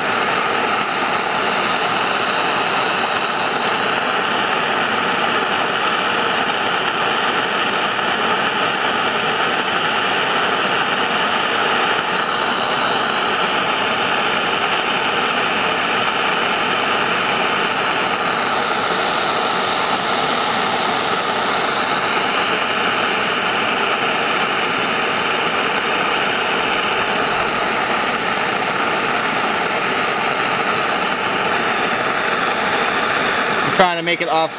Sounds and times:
Outside, rural or natural: 0:00.0 - 0:34.5.

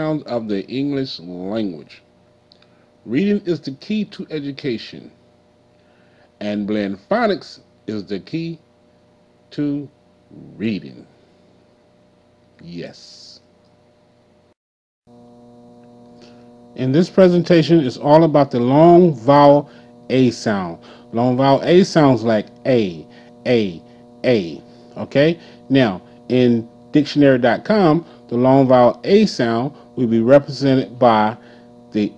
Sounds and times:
Speech: 0:00.0 - 0:02.0, 0:03.1 - 0:05.2, 0:06.4 - 0:08.6, 0:09.5 - 0:11.1, 0:12.6 - 0:13.4, 0:16.8 - 0:31.4, 0:32.0 - 0:32.1.

